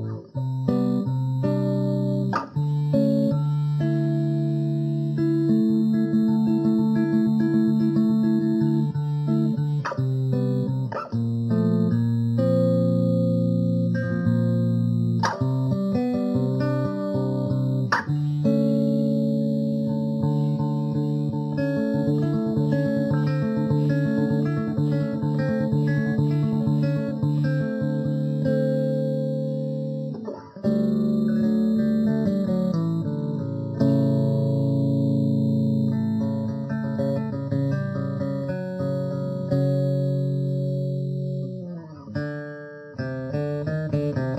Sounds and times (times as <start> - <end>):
Bass guitar: 0.0 - 44.3
Electric guitar: 0.0 - 44.3
Electronic tuner: 0.0 - 44.3.